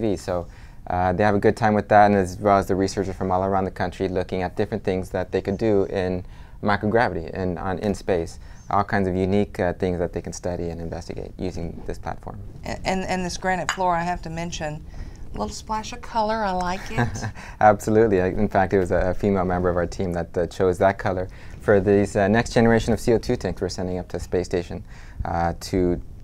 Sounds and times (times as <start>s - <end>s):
Speech: 0.0s - 14.8s, 17.6s - 26.0s.